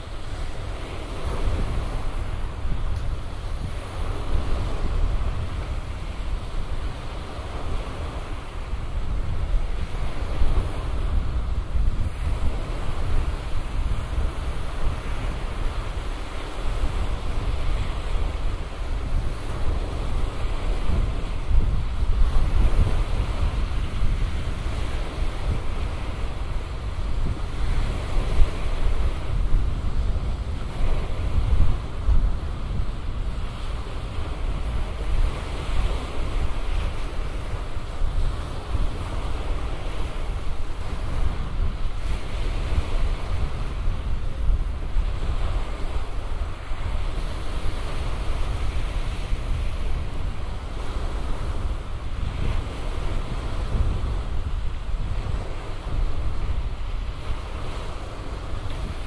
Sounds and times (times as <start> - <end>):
Waves, surf: 0.0 - 59.0.